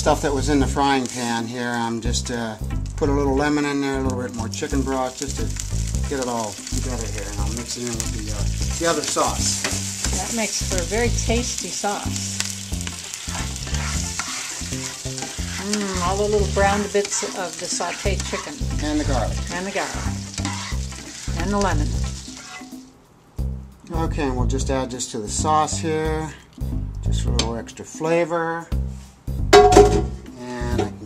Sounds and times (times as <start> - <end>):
Sizzle: 0.0 - 24.0.